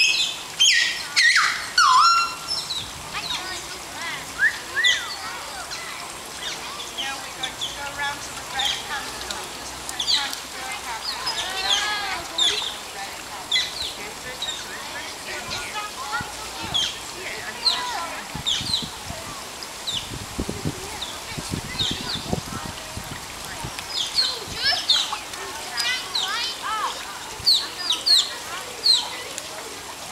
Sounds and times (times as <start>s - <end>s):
Stream: 0.0s - 30.1s
Speech: 3.2s - 19.6s, 20.4s - 30.1s.